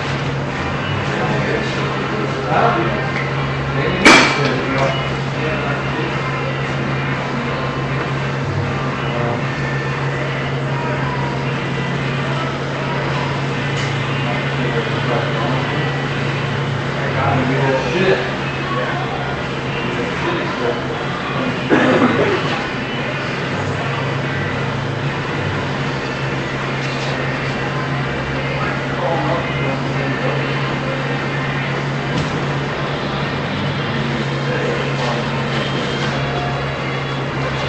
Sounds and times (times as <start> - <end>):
Speech: 0.8 - 24.5, 26.6 - 32.2, 32.8 - 37.6.